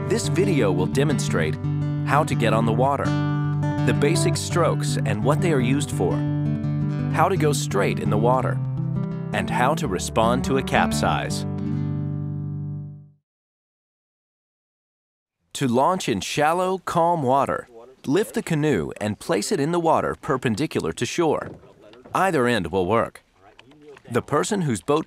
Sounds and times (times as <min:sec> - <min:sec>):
Music: 0:00.0 - 0:13.2
Speech: 0:00.1 - 0:03.1, 0:03.9 - 0:06.2, 0:07.2 - 0:08.6, 0:09.4 - 0:11.4, 0:15.6 - 0:25.0.